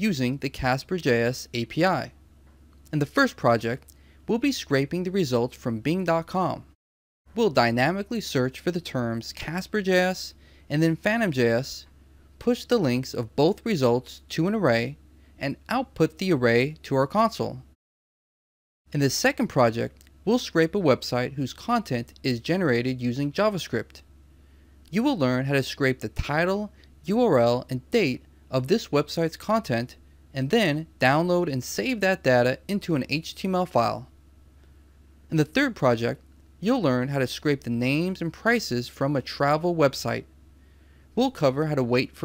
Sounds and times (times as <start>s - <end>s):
Speech: 0.0s - 2.2s, 2.9s - 17.8s, 18.9s - 24.0s, 24.9s - 34.1s, 35.3s - 40.3s, 41.2s - 42.2s.